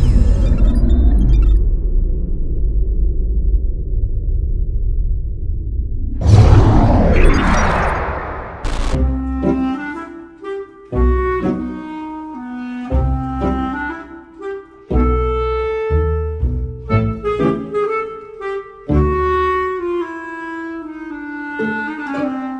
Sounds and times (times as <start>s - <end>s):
Wind instrument, woodwind instrument: 9.0s - 22.5s.